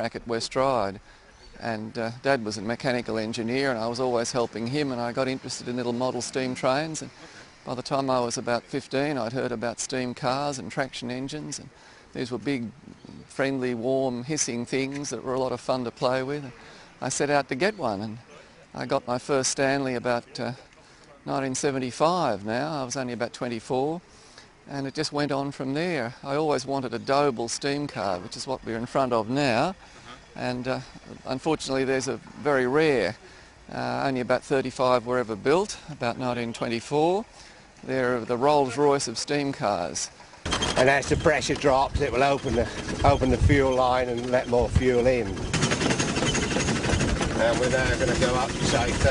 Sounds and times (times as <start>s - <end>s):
Speech: 0.0s - 1.0s, 1.6s - 24.0s, 24.7s - 29.8s, 30.4s - 40.1s, 40.8s - 45.4s, 47.3s - 49.1s.